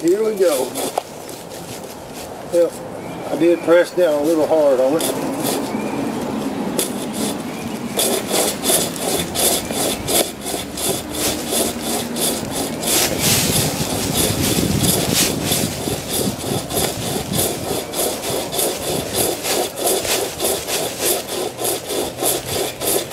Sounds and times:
Speech: 0:00.0 - 0:00.8, 0:02.5 - 0:05.2.

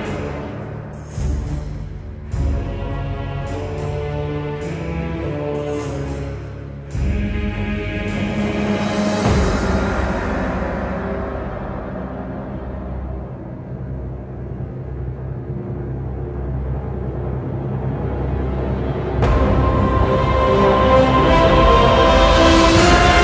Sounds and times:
Music: 0:00.0 - 0:23.2.

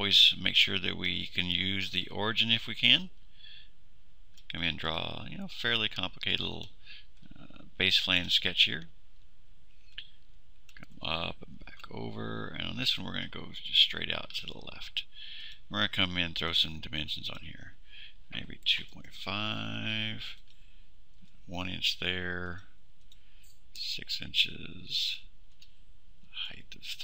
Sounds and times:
Speech: 0:00.0 - 0:03.2, 0:04.5 - 0:08.9, 0:10.8 - 0:15.1, 0:15.7 - 0:20.4, 0:21.5 - 0:22.8, 0:23.8 - 0:25.3, 0:26.4 - 0:27.0.

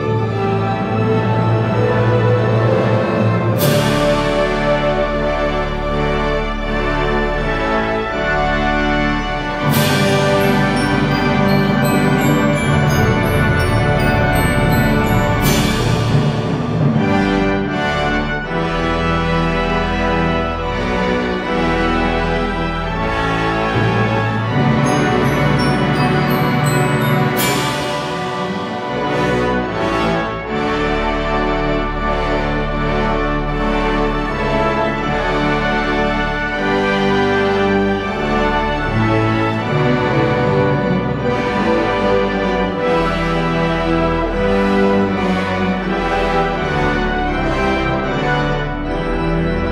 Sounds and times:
Christmas music: 0:00.0 - 0:49.7
Orchestra: 0:00.0 - 0:49.7
Theme music: 0:00.0 - 0:49.7
Soundtrack music: 0:07.8 - 0:19.1, 0:22.5 - 0:32.0.

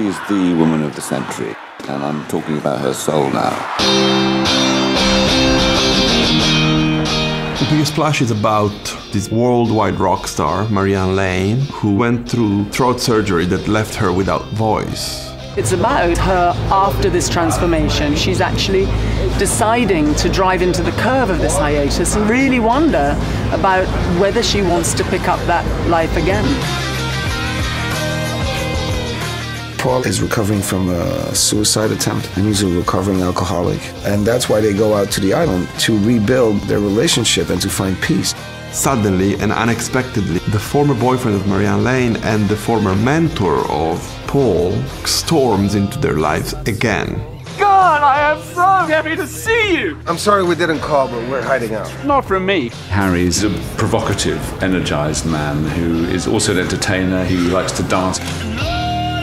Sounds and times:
Speech: 0:00.0 - 0:03.7, 0:07.6 - 0:26.6, 0:29.8 - 0:58.3
Music: 0:00.0 - 0:59.2.

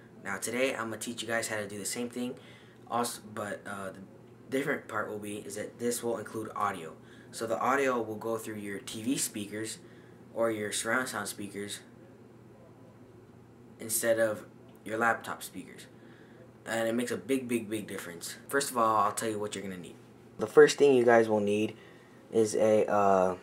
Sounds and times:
Speech: 0:00.2 - 0:09.8, 0:10.4 - 0:11.9, 0:13.8 - 0:15.9, 0:16.6 - 0:23.4.

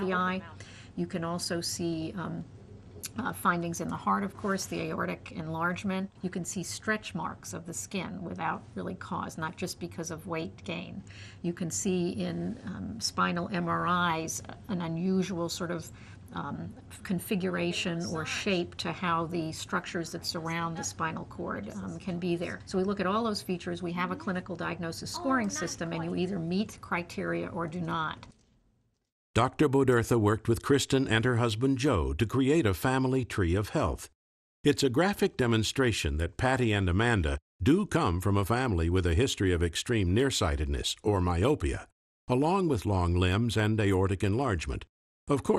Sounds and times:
Speech: 0:16.4 - 0:28.3, 0:29.4 - 0:34.1, 0:34.7 - 0:45.5.

